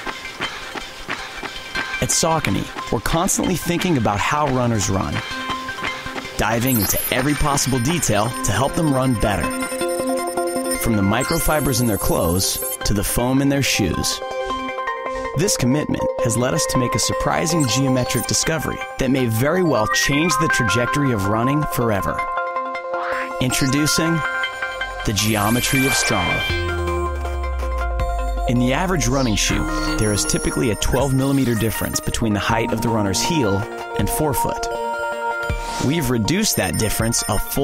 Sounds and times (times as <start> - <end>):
Music: 0.0 - 37.6
Speech: 2.0 - 5.2, 6.4 - 9.5, 10.8 - 14.2, 15.4 - 22.3, 23.4 - 24.3, 25.0 - 26.5, 28.5 - 34.7, 35.8 - 37.6.